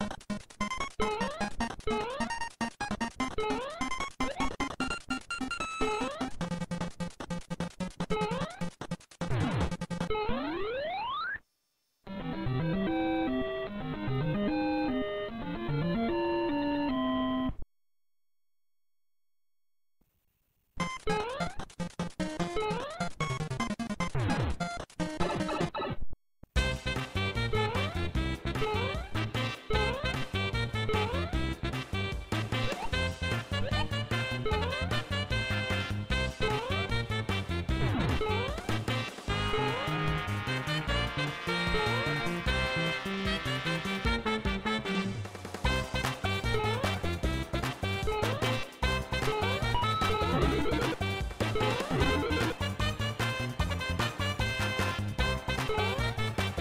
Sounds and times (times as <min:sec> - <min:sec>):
Music: 0:00.0 - 0:10.2, 0:12.1 - 0:17.6, 0:20.8 - 0:25.7, 0:26.6 - 0:56.6.